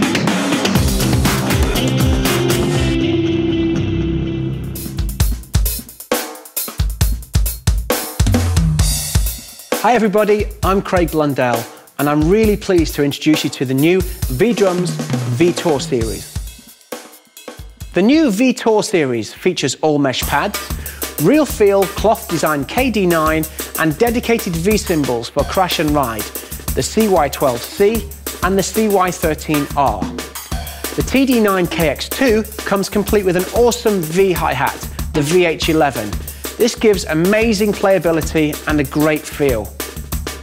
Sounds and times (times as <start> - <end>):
Drum: 0.0 - 3.2, 4.8 - 18.3, 20.2 - 40.4
Drum kit: 0.0 - 18.6, 20.2 - 40.4
Speech: 9.8 - 16.3, 18.0 - 30.1, 31.0 - 39.7.